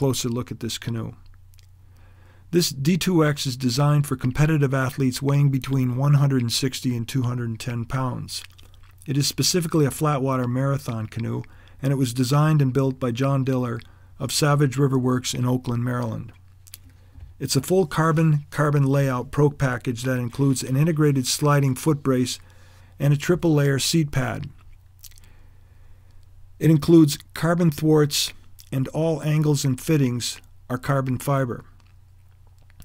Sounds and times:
Speech: 0.0s - 1.3s, 2.5s - 16.4s, 17.4s - 24.6s, 26.6s - 31.8s.

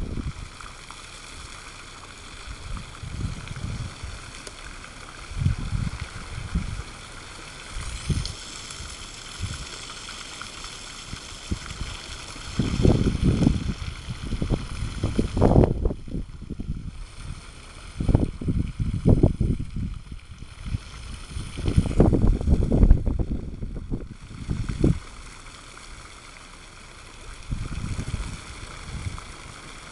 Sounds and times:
Gurgling: 2.4s - 26.3s, 27.1s - 29.9s.

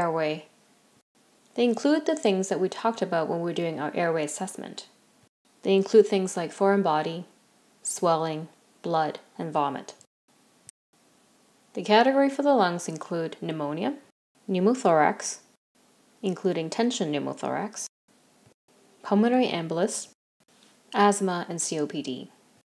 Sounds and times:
Speech: 0.0s - 0.5s, 1.6s - 4.9s, 5.6s - 7.3s, 7.9s - 10.1s, 11.8s - 15.5s, 16.2s - 17.9s, 19.0s - 20.2s, 21.0s - 22.3s.

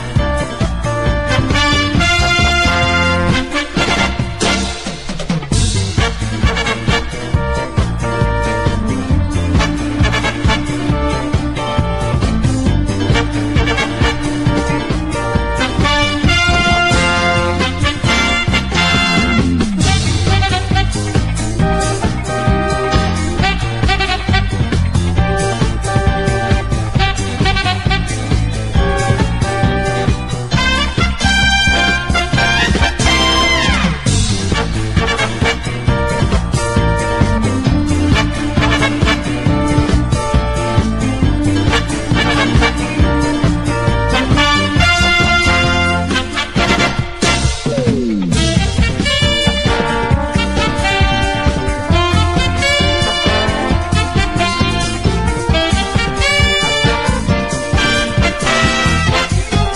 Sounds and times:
Music: 0.0s - 59.7s.

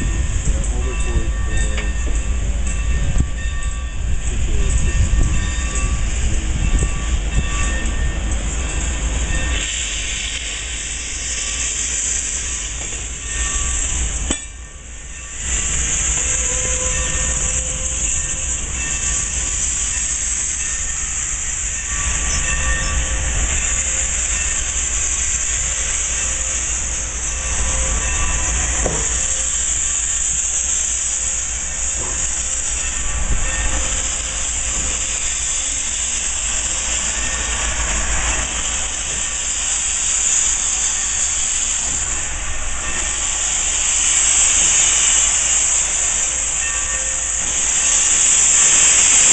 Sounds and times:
Hiss: 4.3s - 49.3s.

